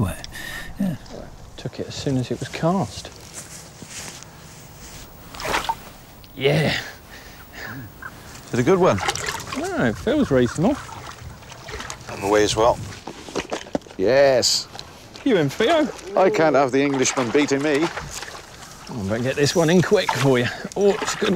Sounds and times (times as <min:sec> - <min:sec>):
Outside, rural or natural: 0:00.0 - 0:21.3.